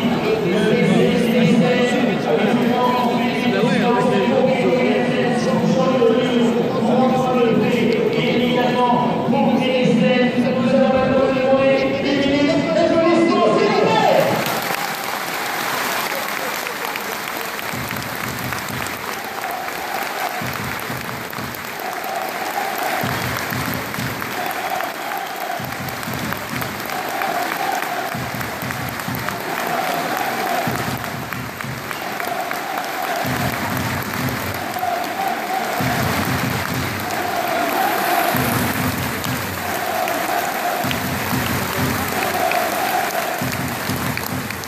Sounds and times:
Applause: 0:14.0 - 0:44.6.

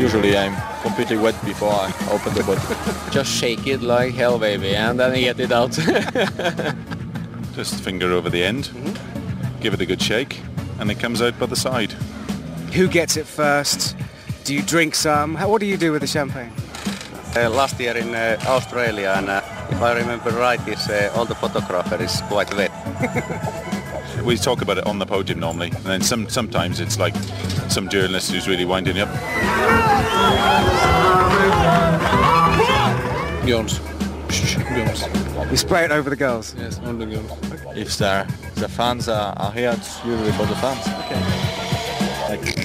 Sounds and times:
Music: 0:00.0 - 0:42.6
Speech: 0:12.7 - 0:16.5, 0:17.4 - 0:22.7, 0:24.2 - 0:29.1, 0:33.5 - 0:41.0.

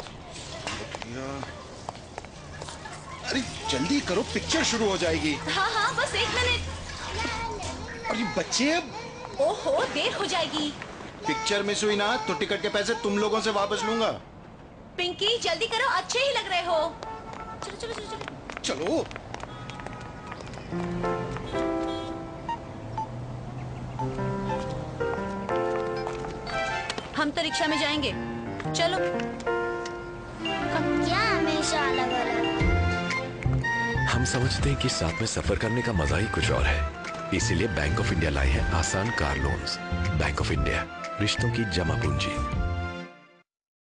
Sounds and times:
Music: 0:20.8 - 0:22.6, 0:24.0 - 0:43.4.

